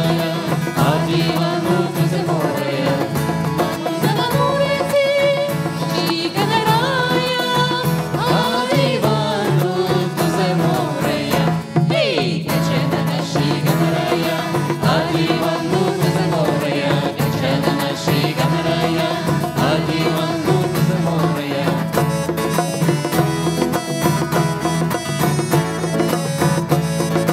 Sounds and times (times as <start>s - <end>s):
Traditional music: 0.0s - 27.3s.